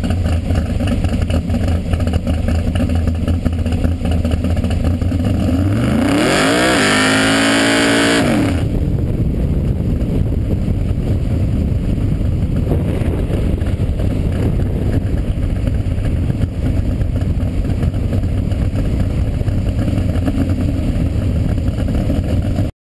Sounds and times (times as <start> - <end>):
Car: 0.0 - 22.7.